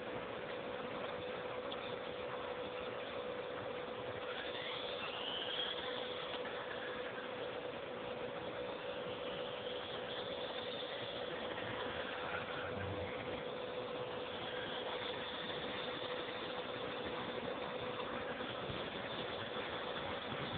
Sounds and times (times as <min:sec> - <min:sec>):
Outside, urban or manmade: 0:00.0 - 0:20.5.